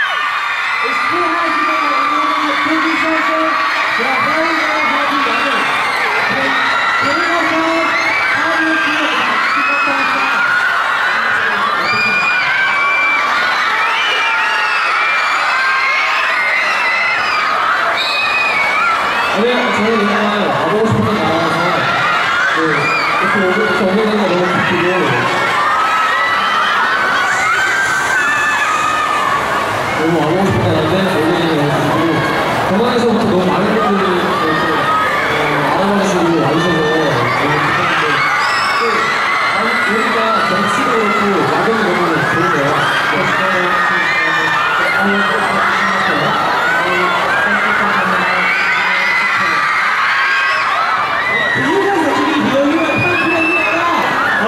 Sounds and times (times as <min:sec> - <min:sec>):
Speech: 0:00.8 - 0:05.7, 0:06.3 - 0:10.5, 0:19.4 - 0:22.0, 0:22.6 - 0:25.3, 0:30.0 - 0:49.8, 0:51.5 - 0:54.4.